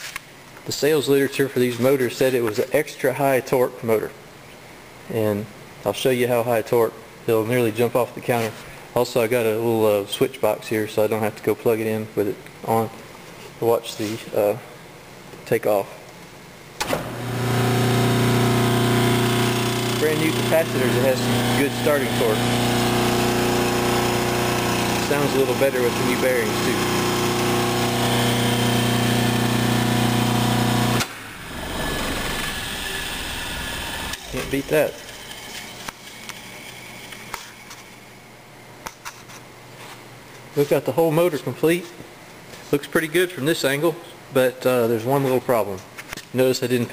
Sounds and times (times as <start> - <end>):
Speech: 0.6 - 4.2, 5.1 - 13.0, 13.6 - 14.7, 15.4 - 16.0, 20.0 - 22.5, 25.0 - 26.9, 34.2 - 35.0, 40.6 - 42.0, 42.6 - 46.9
Engine: 16.8 - 36.0.